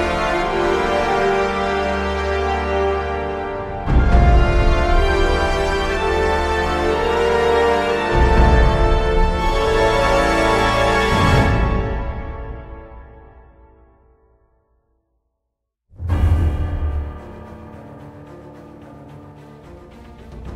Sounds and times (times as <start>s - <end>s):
Theme music: 0.0s - 14.2s, 15.9s - 20.5s.